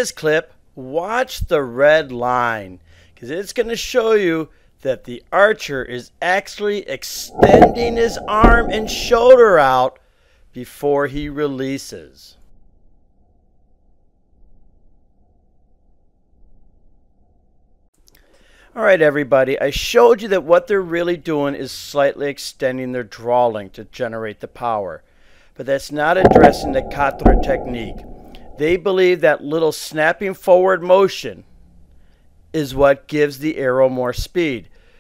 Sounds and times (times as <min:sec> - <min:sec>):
Speech: 0:00.0 - 0:09.9, 0:10.6 - 0:12.4, 0:18.8 - 0:25.0, 0:25.6 - 0:28.0, 0:28.6 - 0:31.5, 0:32.6 - 0:34.7.